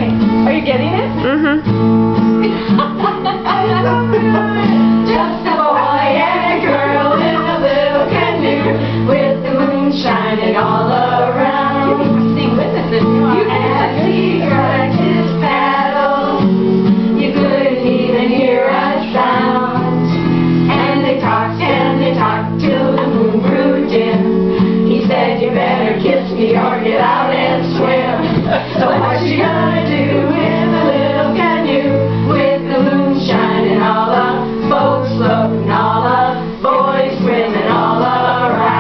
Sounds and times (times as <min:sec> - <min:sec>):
Music: 0:00.0 - 0:38.8.